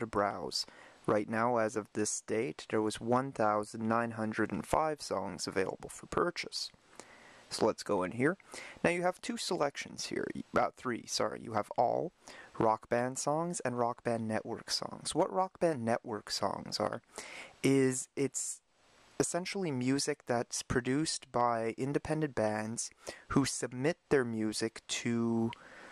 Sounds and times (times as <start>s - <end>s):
Speech: 0.0s - 6.8s, 7.5s - 18.6s, 19.2s - 25.6s.